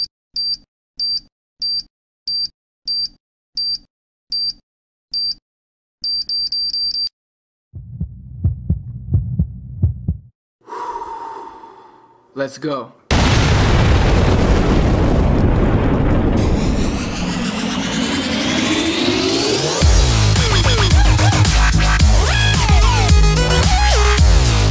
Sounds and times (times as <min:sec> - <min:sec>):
Heart sounds, heartbeat: 0:07.8 - 0:10.3
Throbbing: 0:07.8 - 0:10.3
Hum: 0:07.8 - 0:12.3, 0:16.3 - 0:22.4.